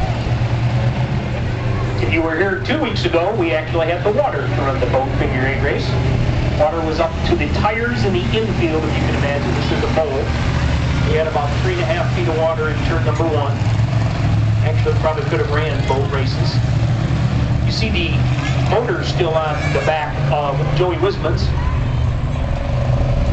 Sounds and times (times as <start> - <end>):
Vehicle: 0.0 - 23.3
Speech: 2.0 - 6.0, 6.6 - 10.3, 11.1 - 13.6, 14.6 - 16.6, 17.7 - 21.6.